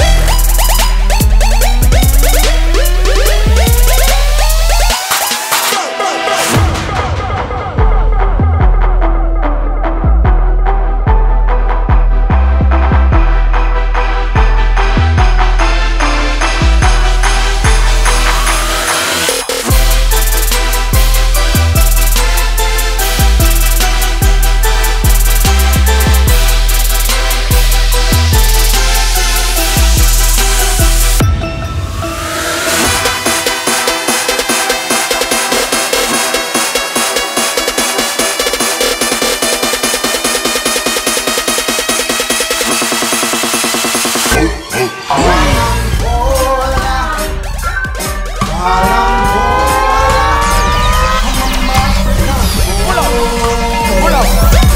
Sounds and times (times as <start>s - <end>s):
Music: 0.0s - 54.7s.